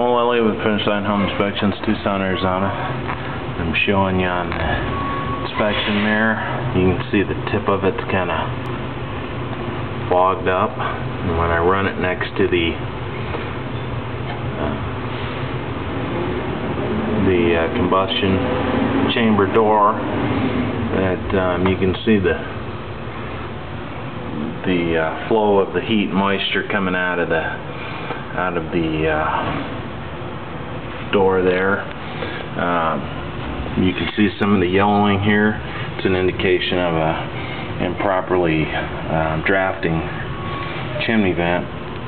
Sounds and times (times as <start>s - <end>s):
Speech: 0.0s - 3.0s, 3.6s - 4.8s, 5.4s - 8.6s, 10.1s - 12.8s, 14.5s - 14.9s, 17.2s - 18.5s, 19.1s - 20.0s, 20.9s - 22.6s, 24.4s - 27.6s, 28.3s - 29.6s, 31.1s - 31.9s, 32.6s - 33.1s, 33.8s - 40.3s, 41.0s - 41.7s.